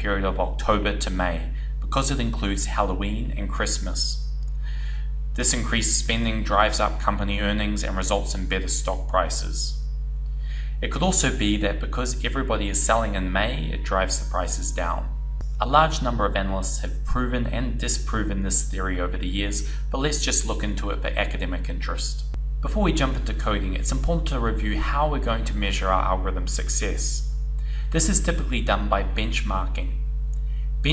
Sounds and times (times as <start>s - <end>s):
Speech: 0.0s - 9.8s, 10.6s - 30.0s.